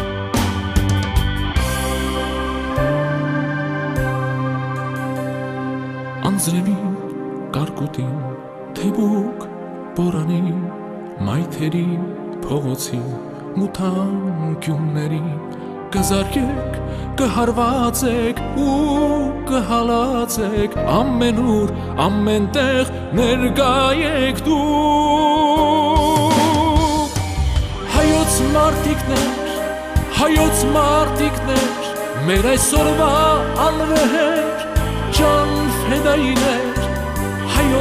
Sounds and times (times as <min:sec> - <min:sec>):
Theme music: 0:00.0 - 0:37.8.